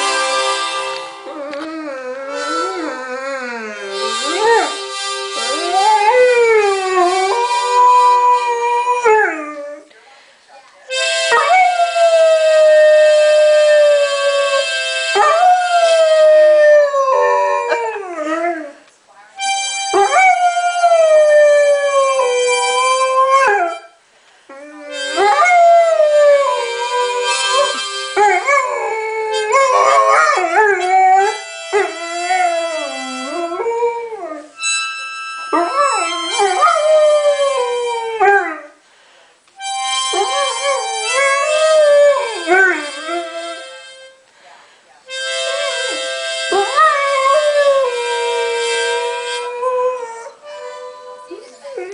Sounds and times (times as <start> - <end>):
Harmonica: 0.0 - 8.9, 10.9 - 18.4, 19.4 - 38.7, 39.6 - 44.3, 45.1 - 51.9
Howl: 11.3 - 18.7, 20.0 - 23.8, 24.6 - 34.5, 35.5 - 38.7, 40.1 - 43.5, 46.5 - 50.4.